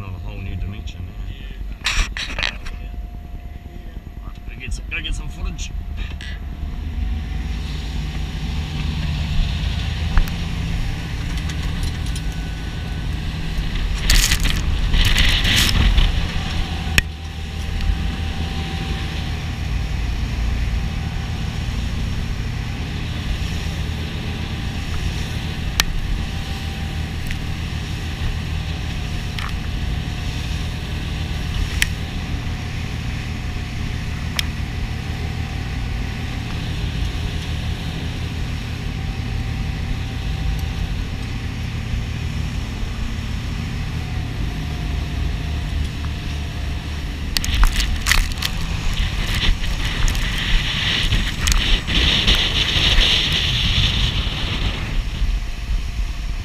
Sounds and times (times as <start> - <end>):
Vehicle: 0.0 - 56.4.